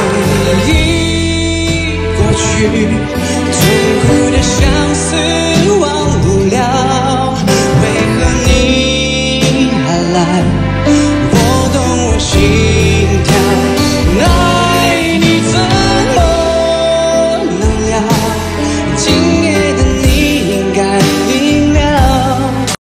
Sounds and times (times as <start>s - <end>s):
Male singing: 0.0s - 22.8s
Music: 0.0s - 22.8s.